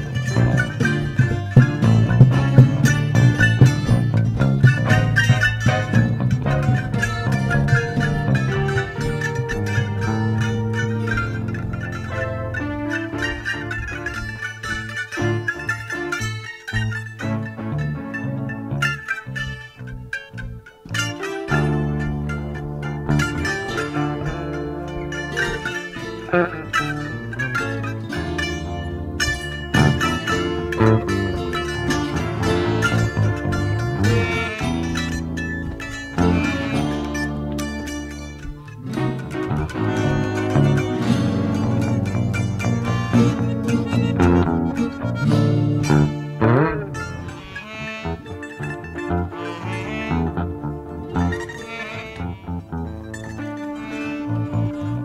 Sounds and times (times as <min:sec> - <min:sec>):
Pizzicato: 0:00.0 - 0:55.0.